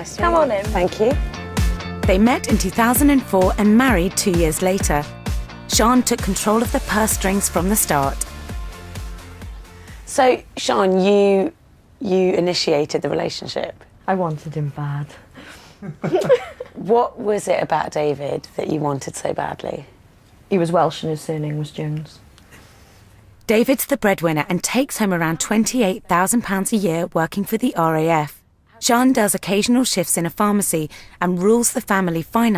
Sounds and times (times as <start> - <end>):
Speech: 23.5 - 32.5.